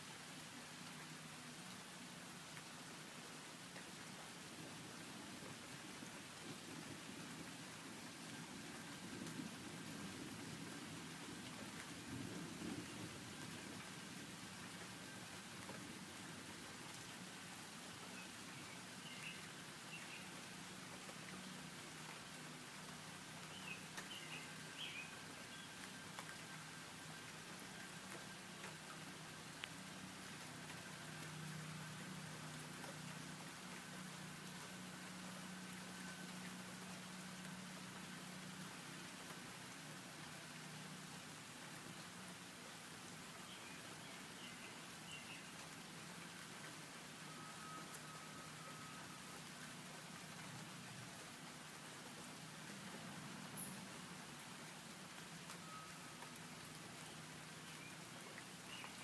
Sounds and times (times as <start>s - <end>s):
Rustle: 0.0s - 59.0s.